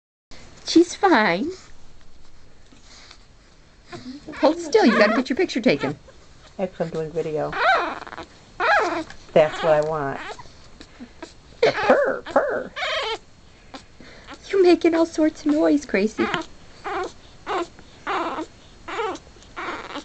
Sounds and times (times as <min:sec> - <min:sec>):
Speech: 0:04.1 - 0:06.0, 0:06.6 - 0:07.6, 0:09.4 - 0:10.2, 0:14.5 - 0:16.4
Dog: 0:07.5 - 0:14.5, 0:16.2 - 0:20.0.